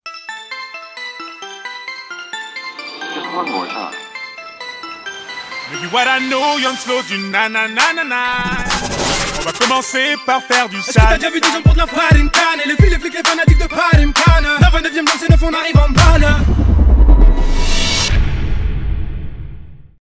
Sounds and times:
Music: 0:00.0 - 0:19.9.

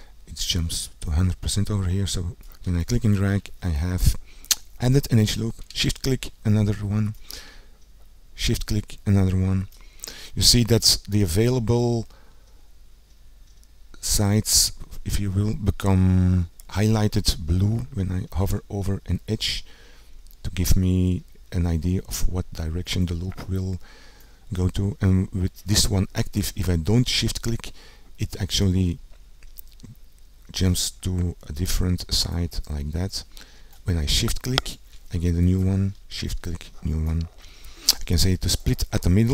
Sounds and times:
Speech: 0:00.3 - 0:04.2, 0:04.8 - 0:07.2, 0:08.4 - 0:09.7, 0:10.4 - 0:12.1, 0:14.0 - 0:19.7, 0:20.4 - 0:23.8, 0:24.5 - 0:29.0, 0:29.8 - 0:39.3.

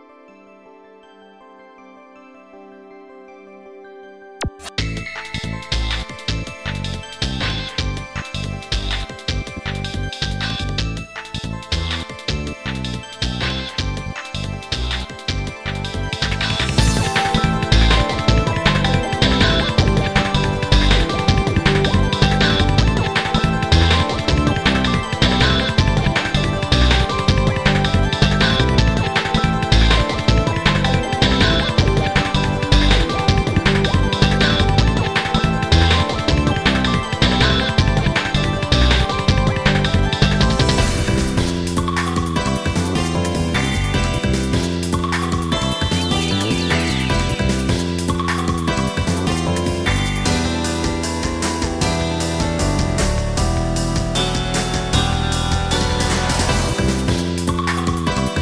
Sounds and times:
Music: 0:00.0 - 0:58.4.

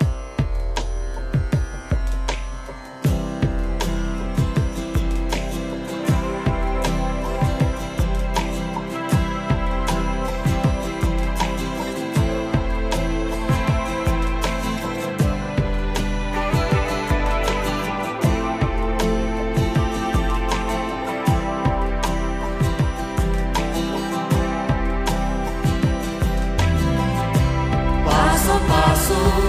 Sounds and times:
Music: 0:00.0 - 0:29.4.

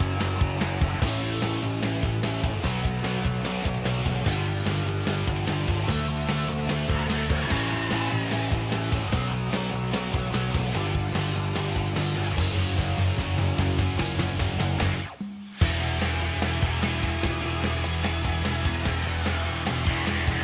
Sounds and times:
Music: 0:00.0 - 0:20.4.

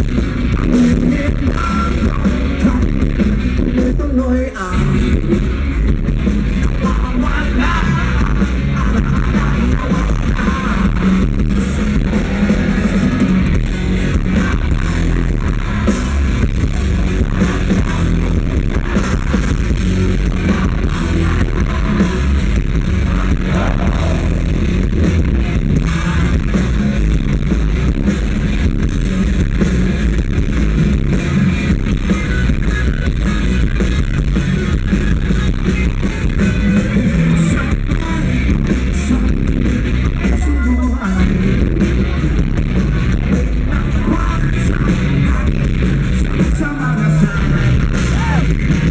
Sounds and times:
Music: 0:00.0 - 0:48.9.

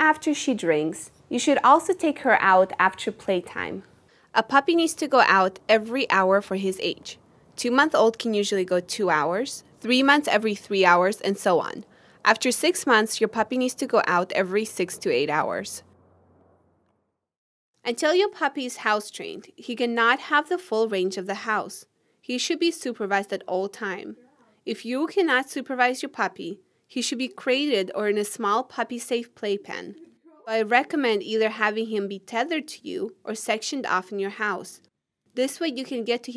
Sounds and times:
Speech: 0:00.0 - 0:15.8, 0:17.9 - 0:34.8, 0:35.4 - 0:36.3.

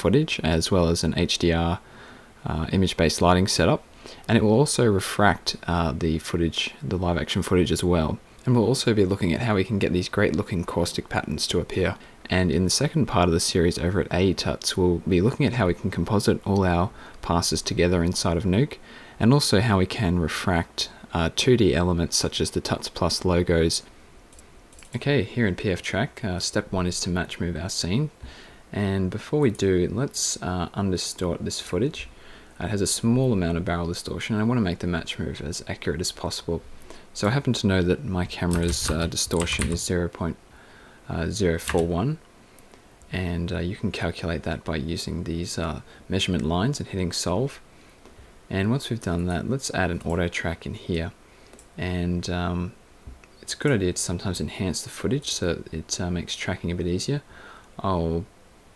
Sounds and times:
Speech: 0:00.0 - 0:01.8, 0:02.4 - 0:23.9, 0:24.9 - 0:40.4, 0:41.1 - 0:42.3, 0:43.1 - 0:47.6, 0:48.5 - 0:51.2, 0:51.8 - 0:52.8, 0:53.4 - 0:58.3.

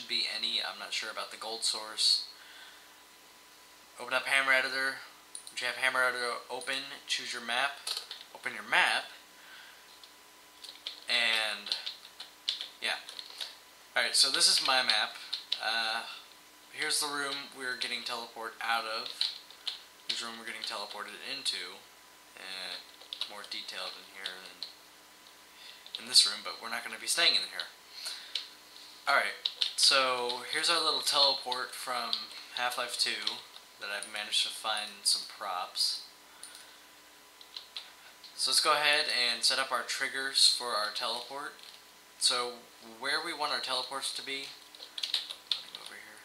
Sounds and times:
Speech: 0:00.0 - 0:02.4, 0:04.0 - 0:09.2, 0:11.1 - 0:12.0, 0:12.8 - 0:13.2, 0:14.0 - 0:19.3, 0:20.1 - 0:24.7, 0:26.0 - 0:27.8, 0:29.1 - 0:36.1, 0:38.4 - 0:41.6, 0:42.2 - 0:44.6, 0:45.7 - 0:46.2.

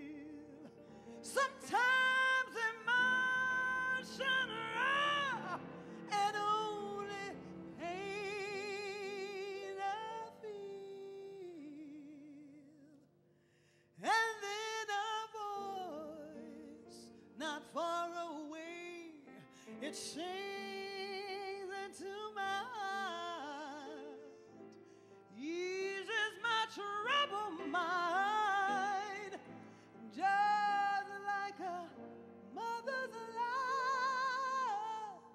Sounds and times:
Female singing: 0:01.2 - 0:12.0.

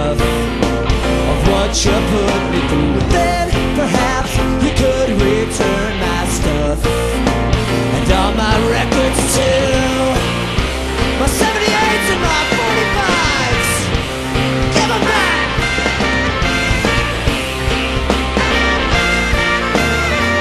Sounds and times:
Music: 0:00.0 - 0:20.4.

